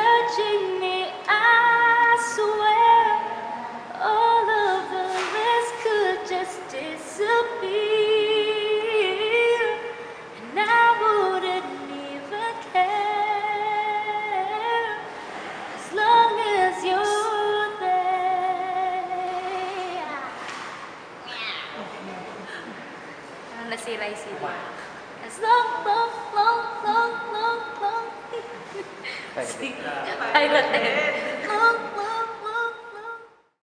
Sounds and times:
Female singing: 0:00.0 - 0:15.0, 0:15.8 - 0:20.1, 0:25.2 - 0:28.3, 0:30.2 - 0:33.3.

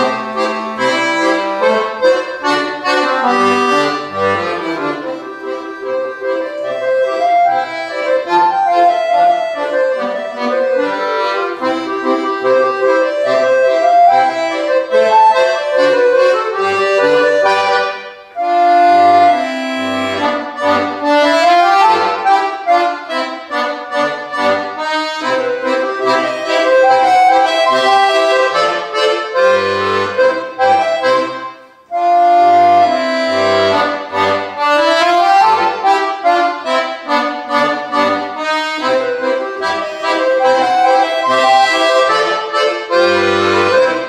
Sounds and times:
Music: 0:00.0 - 0:44.0.

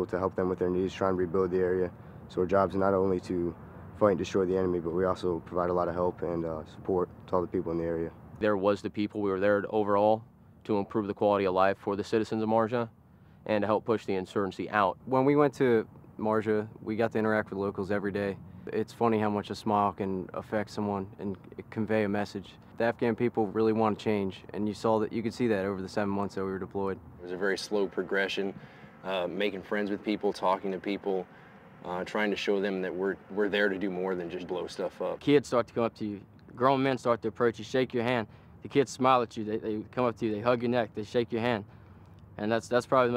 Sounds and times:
Speech: 0:00.0 - 0:41.7, 0:42.4 - 0:43.1.

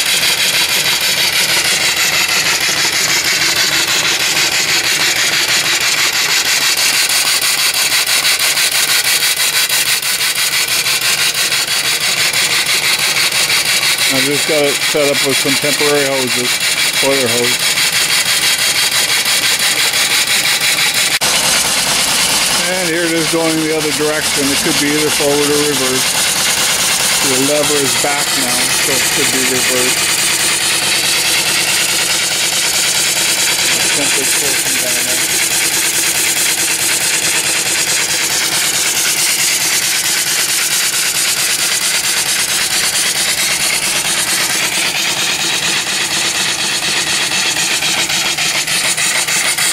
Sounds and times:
Engine: 0:00.0 - 0:49.7
Steam: 0:00.0 - 0:49.7
Speech: 0:14.1 - 0:17.6, 0:22.6 - 0:26.1, 0:27.2 - 0:30.0, 0:33.7 - 0:35.2.

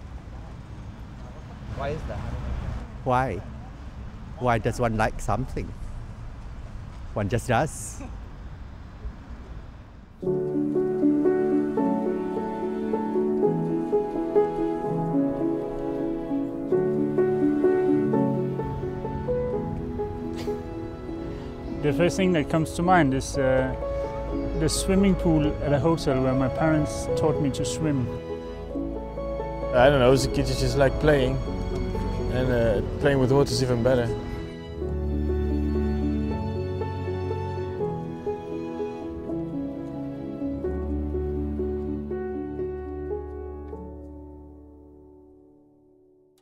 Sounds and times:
Music: 0:10.2 - 0:46.4.

